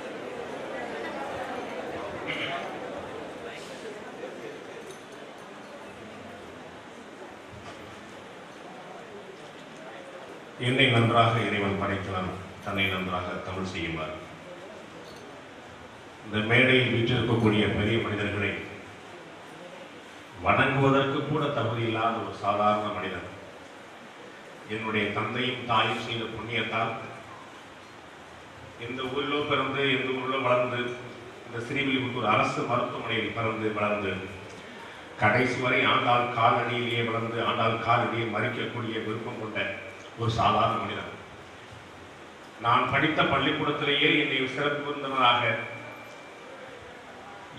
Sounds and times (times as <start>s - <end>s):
Narration, monologue: 9.4s - 46.6s
Male speech, man speaking: 10.0s - 14.3s, 16.2s - 18.8s, 20.4s - 23.4s, 24.7s - 27.2s, 28.8s - 34.4s, 35.2s - 41.2s, 42.6s - 45.9s.